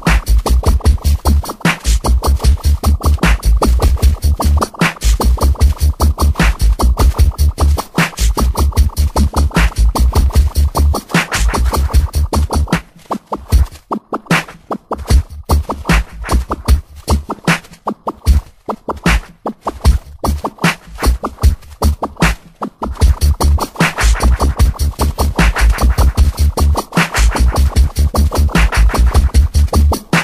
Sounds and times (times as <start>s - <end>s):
Music: 0.0s - 30.2s.